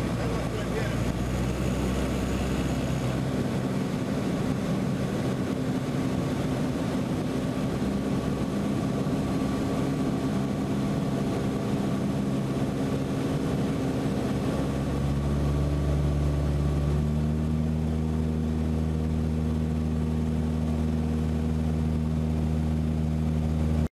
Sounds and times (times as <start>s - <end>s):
Eruption: 0.0s - 23.9s.